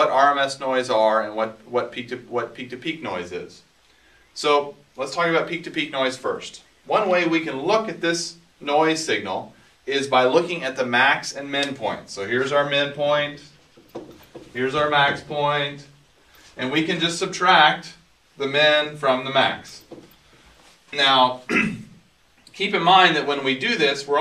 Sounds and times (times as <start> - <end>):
Speech: 0.0 - 3.7, 4.4 - 13.6, 14.5 - 16.0, 16.6 - 19.9, 20.9 - 21.9, 22.5 - 24.2.